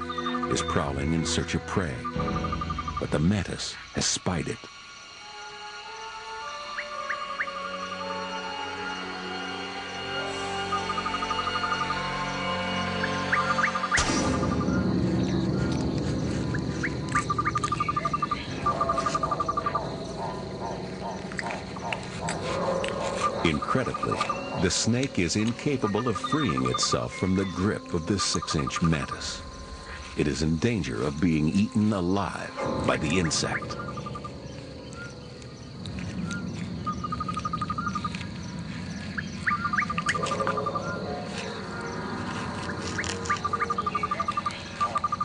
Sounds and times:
Outside, rural or natural: 0.0 - 45.2
Speech: 0.5 - 2.1, 3.0 - 4.7, 23.4 - 29.4, 30.2 - 33.8
Animal: 15.6 - 30.1, 35.8 - 45.2.

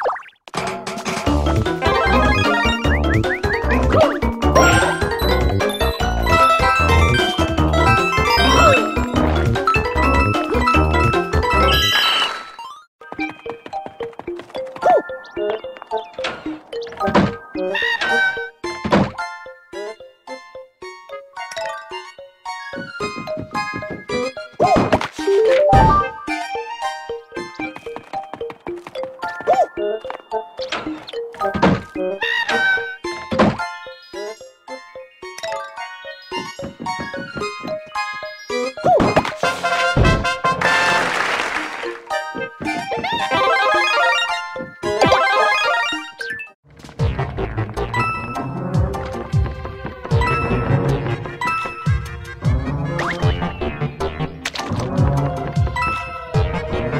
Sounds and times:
Music: 0.5 - 12.0, 13.0 - 56.9.

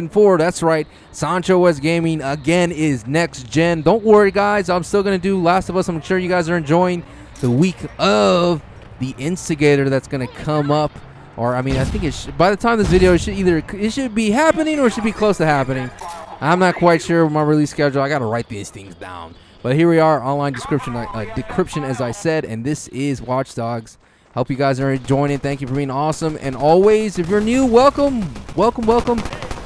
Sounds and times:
Speech: 0.0 - 29.5.

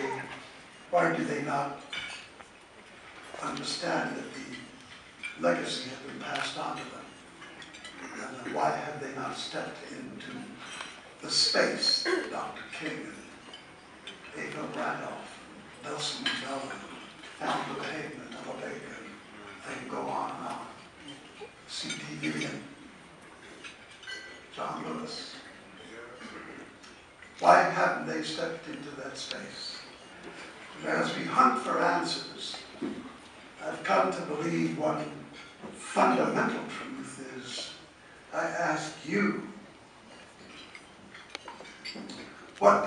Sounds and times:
Male speech, man speaking: 0.0 - 1.8, 3.4 - 4.8, 5.4 - 7.2, 8.1 - 10.6, 11.2 - 13.3, 14.4 - 20.8, 21.7 - 22.8, 24.6 - 26.7, 27.4 - 29.9, 30.8 - 32.7, 33.6 - 39.6, 42.1 - 42.8
Narration, monologue: 0.0 - 42.8.

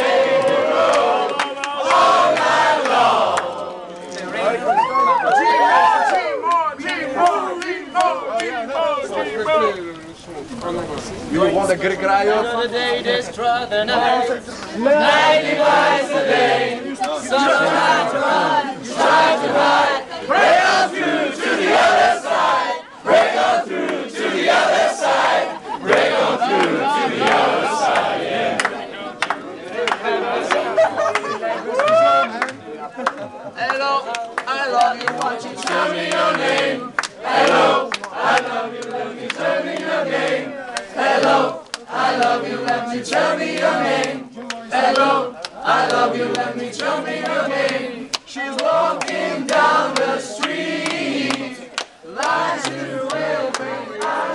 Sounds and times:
Choir: 0.0 - 4.6, 13.7 - 32.4, 34.4 - 54.3
Speech: 4.2 - 15.1, 31.0 - 35.6.

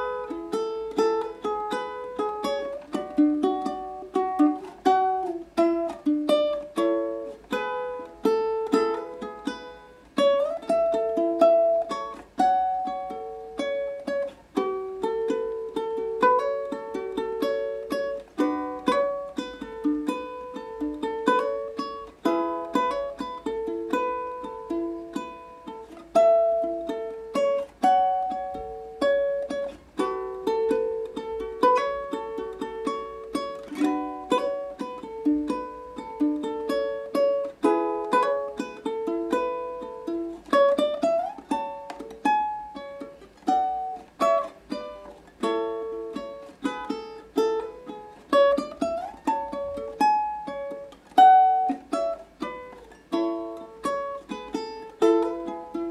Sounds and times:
Guitar: 0.0 - 55.9
Ukulele: 0.0 - 55.9.

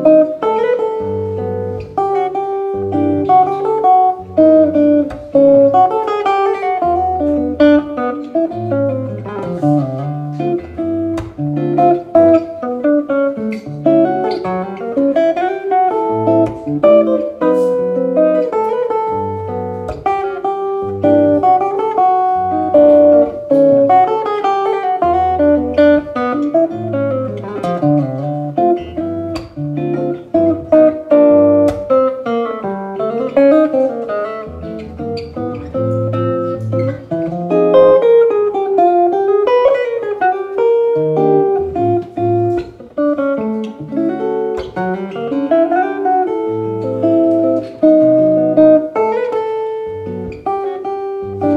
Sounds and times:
Music: 0.0 - 51.5.

